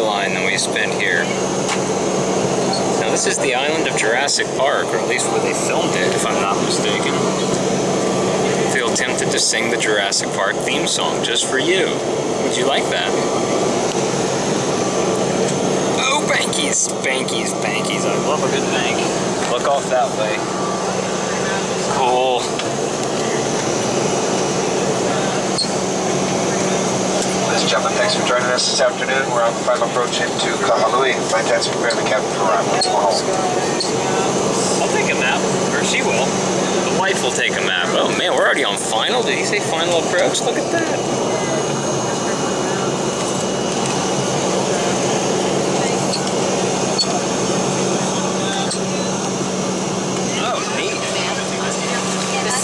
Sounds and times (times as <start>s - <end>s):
Speech: 0.0s - 1.4s, 2.7s - 7.5s, 8.4s - 13.2s, 16.0s - 20.4s, 21.3s - 22.5s, 24.9s - 43.2s, 47.9s - 49.4s, 50.2s - 52.6s
Fixed-wing aircraft, airplane: 0.0s - 52.6s.